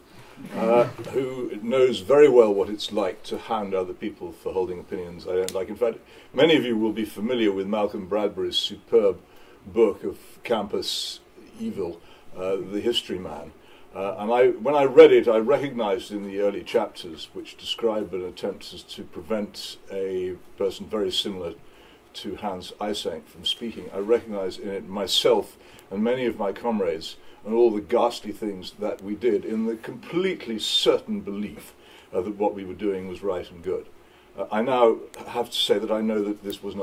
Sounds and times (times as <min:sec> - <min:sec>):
Narration, monologue: 0:00.0 - 0:36.8
Male speech, man speaking: 0:00.5 - 0:21.6, 0:22.2 - 0:36.8.